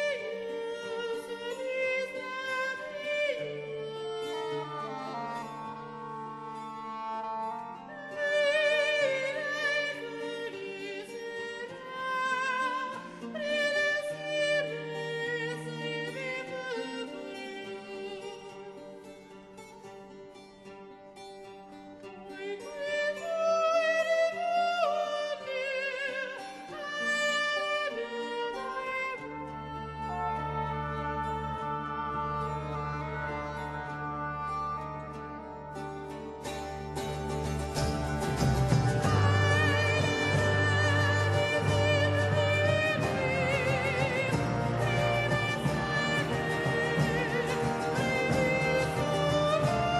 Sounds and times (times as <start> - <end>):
Music: 0.0 - 50.0.